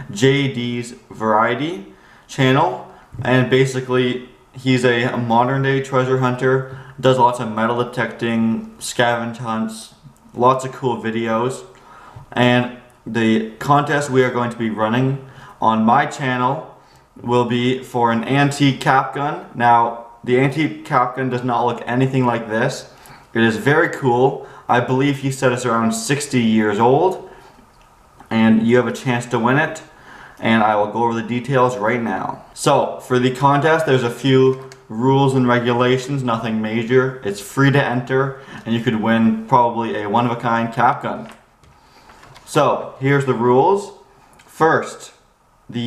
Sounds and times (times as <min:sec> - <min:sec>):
Speech: 0:00.0 - 0:27.3, 0:28.3 - 0:41.4, 0:42.4 - 0:45.8.